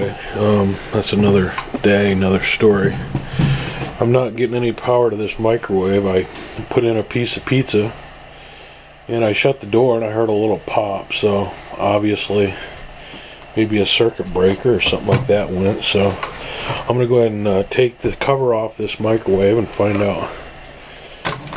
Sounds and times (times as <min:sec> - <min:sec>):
Speech: 0:00.0 - 0:03.2, 0:03.9 - 0:08.0, 0:09.1 - 0:12.8, 0:13.6 - 0:20.4.